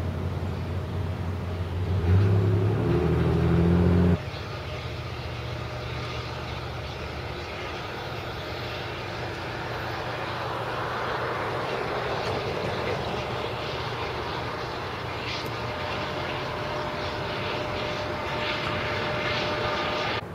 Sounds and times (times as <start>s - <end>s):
Railroad car, train wagon: 0.0s - 20.3s
Train: 0.0s - 20.3s.